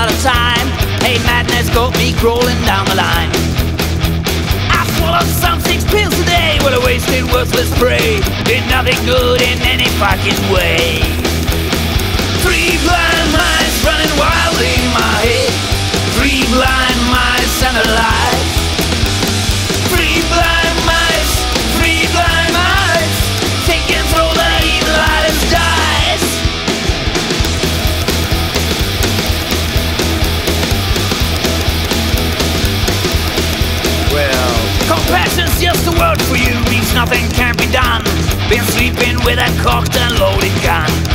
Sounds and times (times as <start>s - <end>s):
Music: 0.0s - 41.1s.